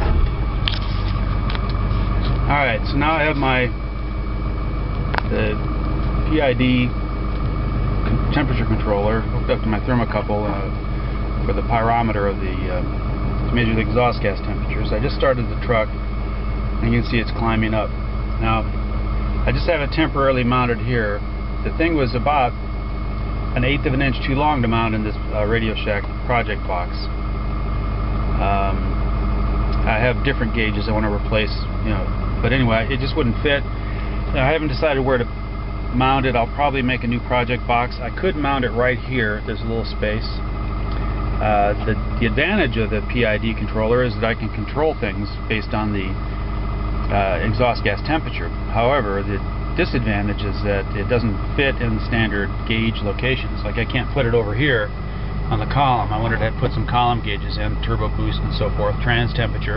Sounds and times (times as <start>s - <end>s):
Vehicle: 0.0s - 59.7s
Speech: 2.4s - 3.8s, 5.2s - 5.6s, 6.2s - 7.0s, 8.1s - 10.8s, 11.4s - 12.9s, 13.5s - 15.9s, 16.8s - 18.7s, 19.4s - 22.6s, 23.6s - 27.1s, 28.4s - 28.9s, 29.8s - 33.7s, 34.3s - 35.3s, 35.9s - 40.4s, 41.4s - 46.2s, 47.1s - 54.9s, 55.5s - 59.7s.